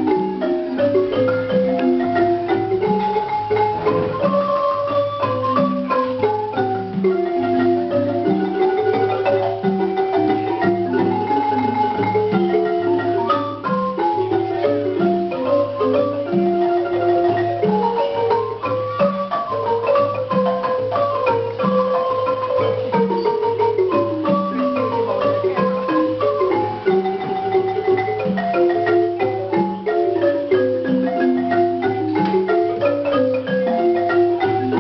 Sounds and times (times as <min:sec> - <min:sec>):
Music: 0:00.0 - 0:34.8.